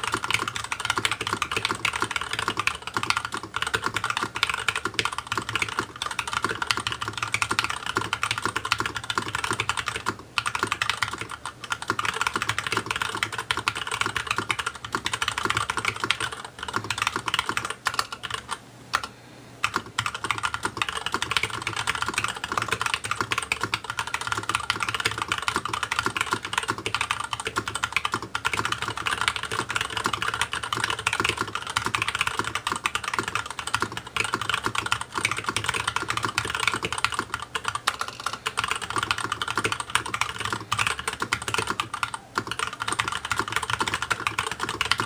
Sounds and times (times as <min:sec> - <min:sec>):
Computer keyboard: 0:00.0 - 0:45.0.